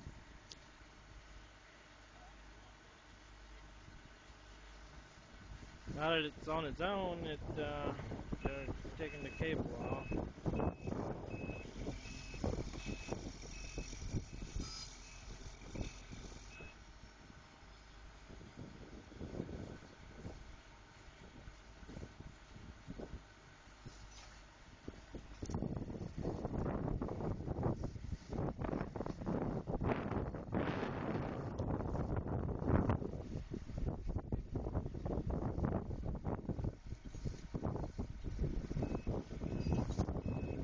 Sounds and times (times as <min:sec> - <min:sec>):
Outside, rural or natural: 0:00.0 - 0:40.6.